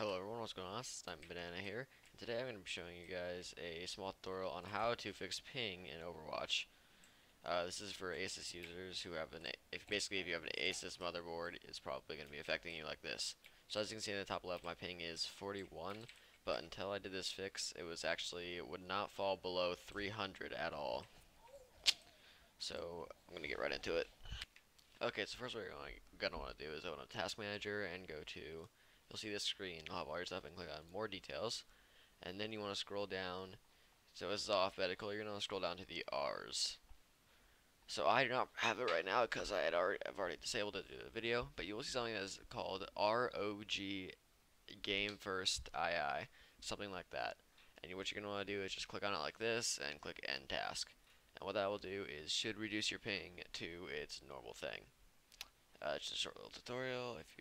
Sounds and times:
Speech: 0.0 - 6.7, 7.4 - 21.2, 22.6 - 33.6, 34.2 - 36.9, 37.9 - 54.9, 55.8 - 57.4.

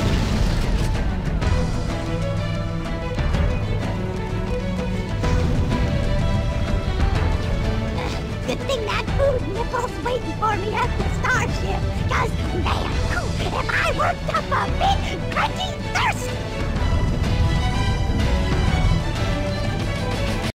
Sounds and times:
Music: 0.0 - 20.5
Speech: 8.0 - 16.4.

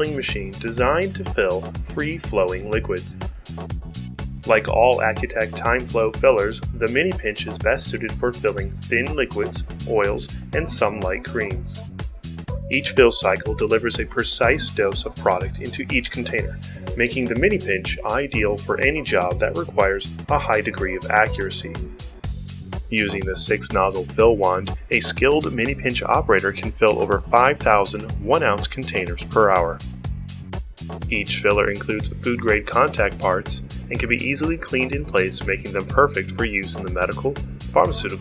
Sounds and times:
Speech: 0.0 - 3.2, 4.5 - 11.8, 12.7 - 21.9, 22.9 - 29.8, 31.1 - 38.2
Music: 0.0 - 38.2.

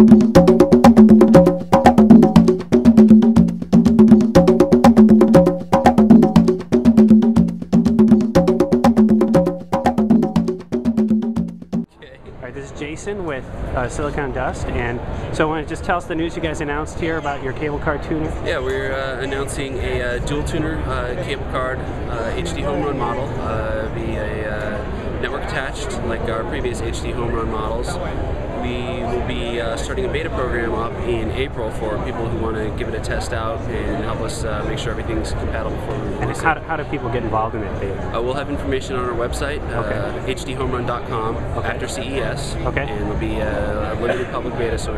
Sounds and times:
Speech: 11.9 - 44.9.

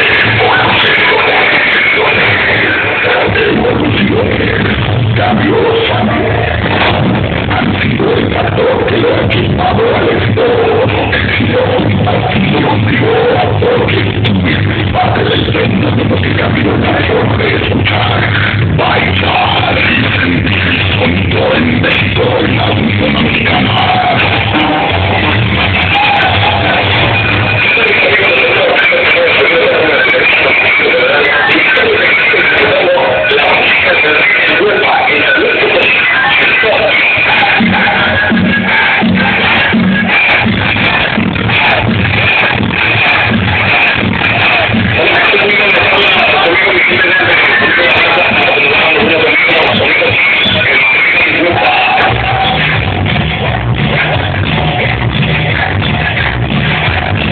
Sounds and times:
Speech: 0.0 - 25.3, 27.6 - 40.1, 43.1 - 52.8.

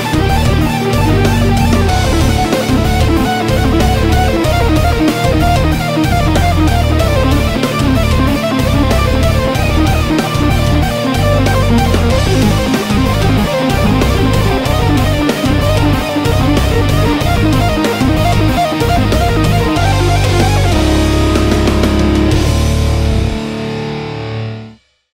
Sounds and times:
Tapping (guitar technique): 0.0 - 23.4.

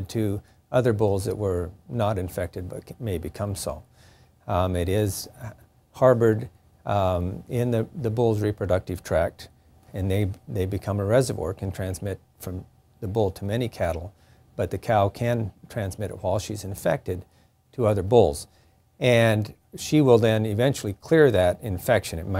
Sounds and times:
Speech: 0.0 - 3.9, 4.5 - 22.3.

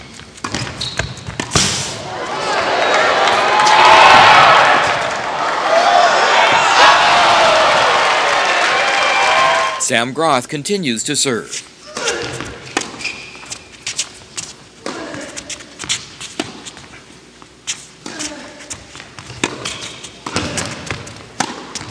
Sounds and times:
Slam: 1.5 - 2.0
Speech: 9.8 - 11.6, 14.9 - 15.5.

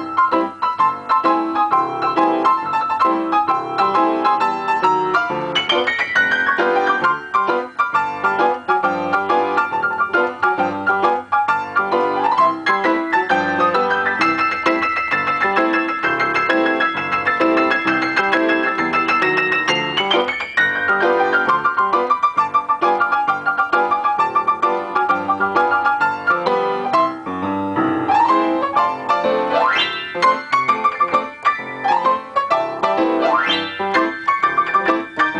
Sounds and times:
Music: 0.0 - 35.3.

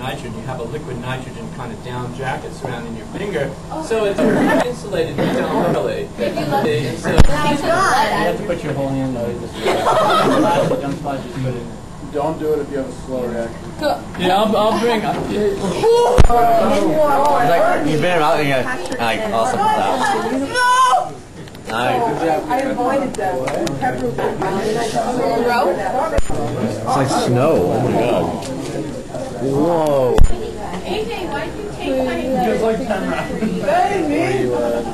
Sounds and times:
Male speech, man speaking: 0.0 - 9.6, 10.2 - 13.6, 14.2 - 20.6, 21.7 - 25.4, 26.3 - 30.3, 32.3 - 34.9
Female speech, woman speaking: 6.2 - 8.3, 21.9 - 27.4, 30.3 - 34.6.

